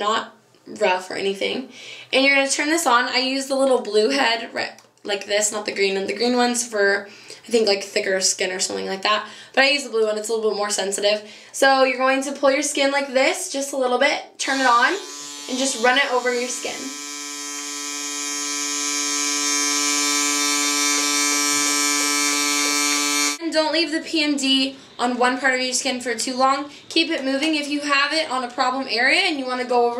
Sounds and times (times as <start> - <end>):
Speech: 0.0 - 16.9, 23.4 - 29.9
Electric shaver, electric razor: 14.4 - 23.4.